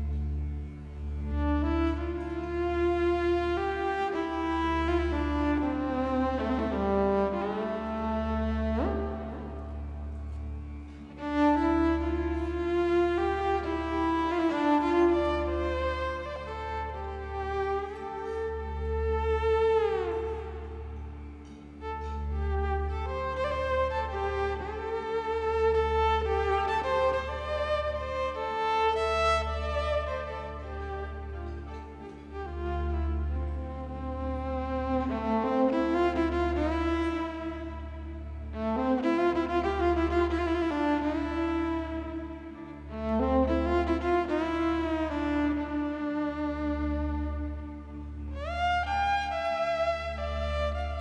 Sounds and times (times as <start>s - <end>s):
Violin, fiddle: 0.0s - 51.0s.